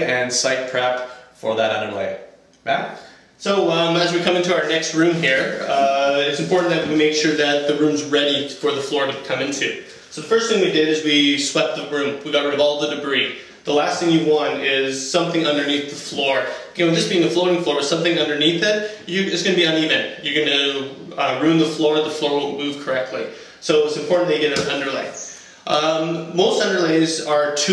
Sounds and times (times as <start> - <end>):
Speech: 0.0 - 27.7.